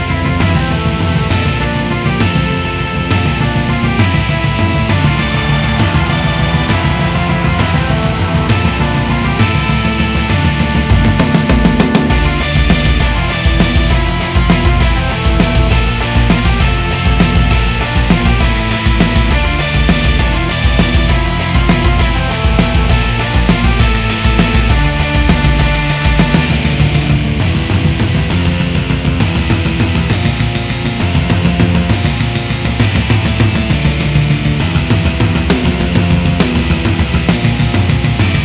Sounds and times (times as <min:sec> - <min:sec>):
Electric guitar: 0:00.0 - 0:38.4.